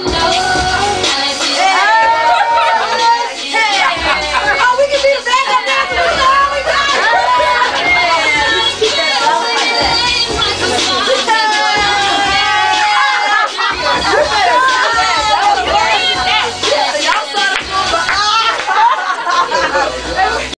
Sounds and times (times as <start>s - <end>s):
Music: 0.0s - 20.5s
Speech: 13.9s - 18.6s.